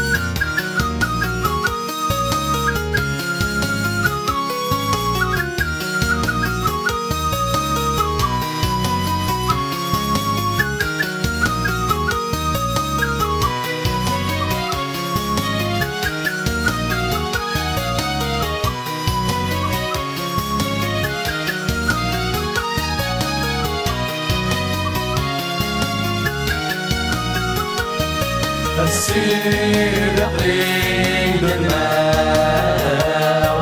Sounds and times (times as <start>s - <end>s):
Music: 0.0s - 33.6s.